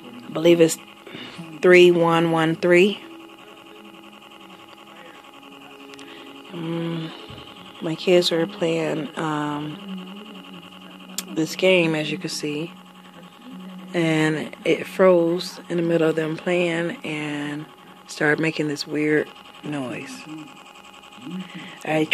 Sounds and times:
Speech: 0.0 - 20.6, 21.2 - 22.1.

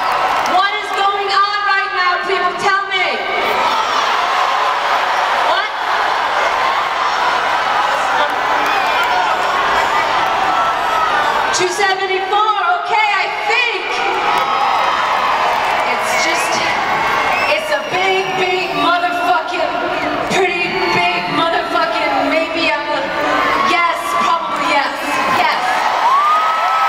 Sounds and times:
Female speech, woman speaking: 0.5 - 3.2, 5.5 - 5.8, 11.6 - 14.2, 15.9 - 16.7, 17.5 - 25.8.

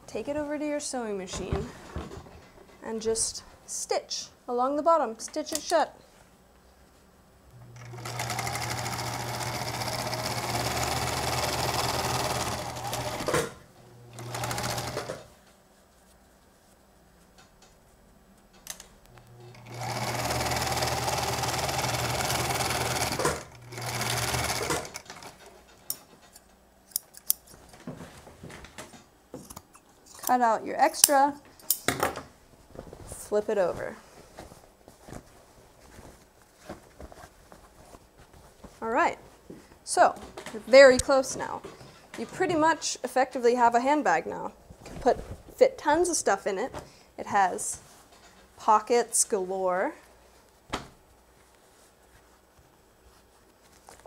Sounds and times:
Speech: 0.1 - 1.8, 2.8 - 6.0, 30.3 - 31.4, 33.1 - 34.0, 38.8 - 39.2, 39.9 - 47.8, 48.6 - 50.0
Sewing machine: 7.8 - 15.3, 19.4 - 25.5.

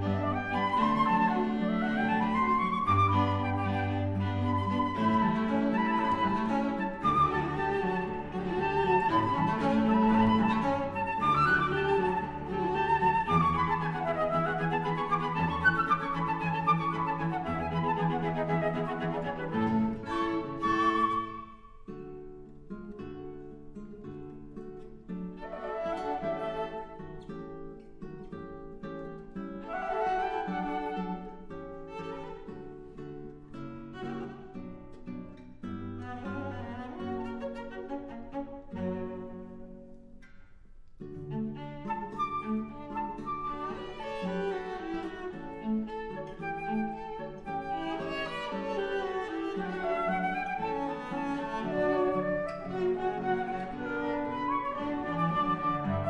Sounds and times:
Violin, fiddle: 0.0 - 21.8, 25.2 - 27.0, 29.6 - 35.1, 35.8 - 39.8, 41.2 - 56.0
Classical music: 0.0 - 40.3, 40.9 - 56.0
Cello: 0.0 - 56.0.

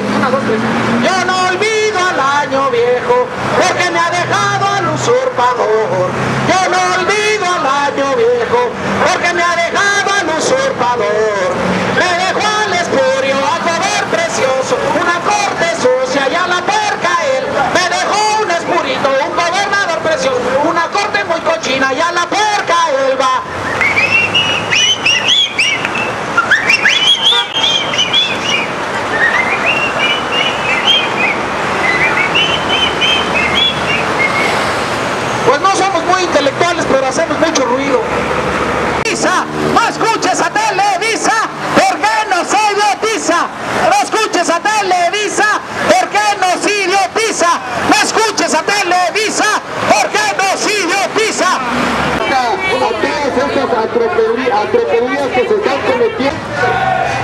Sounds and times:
Speech: 0.0 - 23.5, 35.5 - 38.1, 39.0 - 57.2.

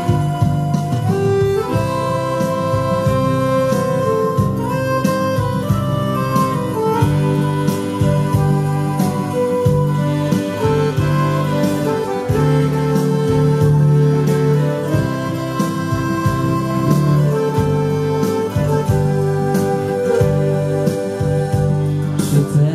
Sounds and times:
Music: 0.0 - 22.7.

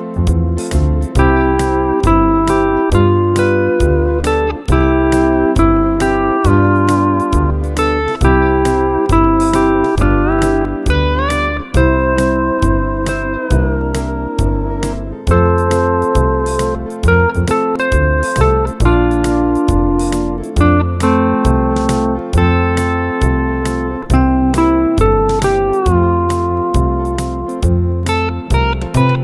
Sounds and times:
Music: 0.0 - 29.2.

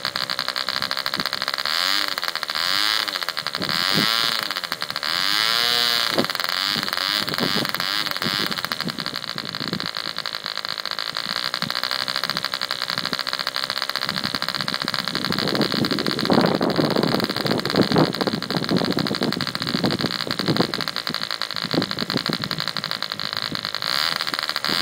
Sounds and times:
Accelerating, revving, vroom: 1.7 - 8.6, 23.8 - 24.8.

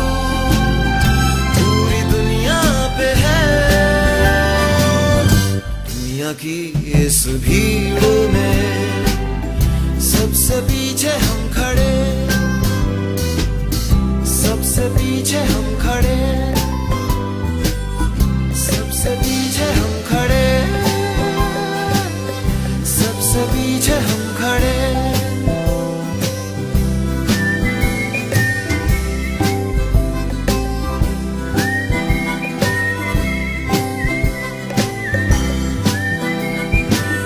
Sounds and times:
Music: 0.0 - 37.2.

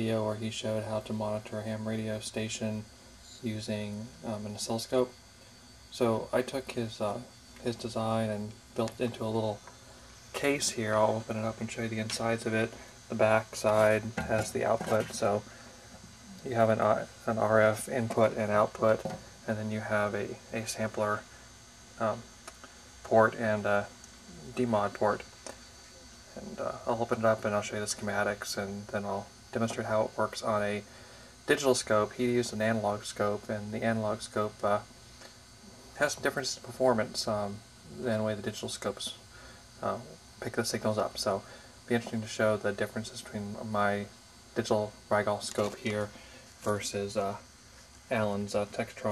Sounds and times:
Speech: 0.0 - 5.2, 5.9 - 9.6, 10.4 - 15.5, 16.4 - 21.3, 22.0 - 22.3, 23.0 - 25.3, 26.3 - 30.9, 31.5 - 34.9, 36.0 - 47.5, 48.1 - 49.1.

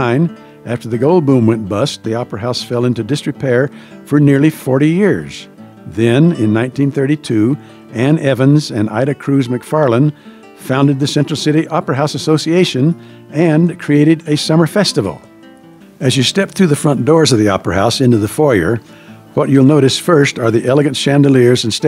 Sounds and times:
Speech: 0.0 - 15.3, 16.0 - 18.8, 19.4 - 21.8
Music: 0.0 - 21.8.

